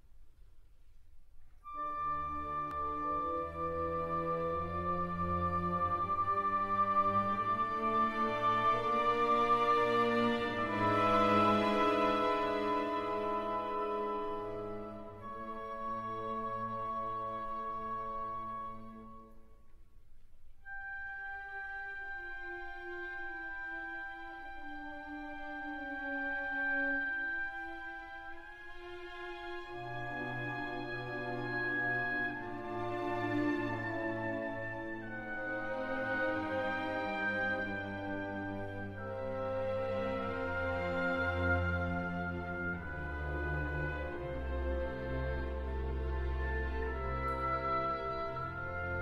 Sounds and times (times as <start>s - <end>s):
Music: 0.0s - 49.0s.